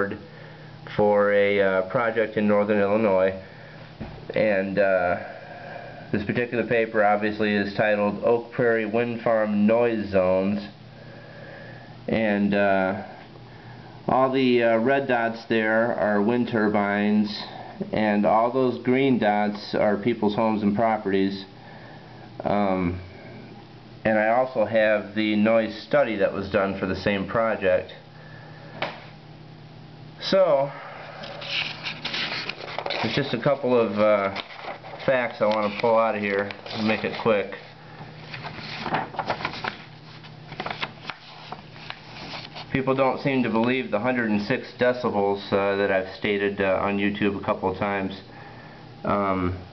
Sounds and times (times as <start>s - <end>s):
Speech: 0.0s - 0.3s, 0.9s - 3.4s, 4.3s - 5.3s, 6.1s - 10.8s, 12.1s - 13.2s, 14.1s - 21.5s, 22.4s - 23.1s, 24.0s - 28.0s, 30.2s - 30.8s, 33.0s - 34.4s, 35.0s - 37.7s, 42.7s - 48.3s, 49.0s - 49.7s.